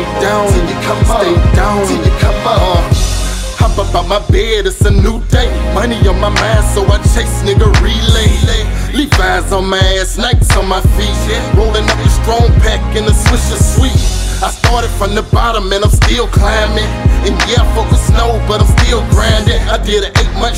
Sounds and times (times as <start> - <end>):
Music: 0.0 - 20.5.